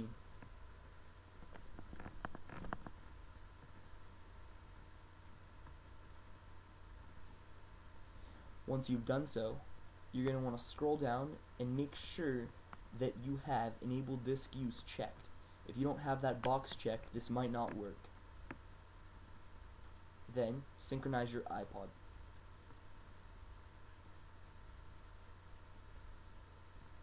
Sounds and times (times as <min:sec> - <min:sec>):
Speech: 0:08.7 - 0:09.6, 0:10.2 - 0:18.1, 0:20.3 - 0:22.0.